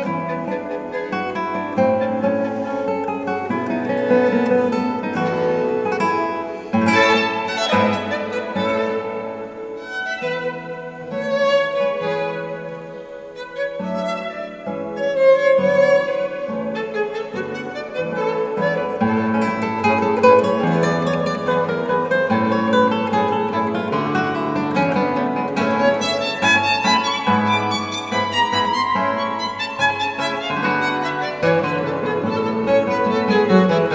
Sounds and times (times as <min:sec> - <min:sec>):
Violin, fiddle: 0:00.0 - 0:33.9.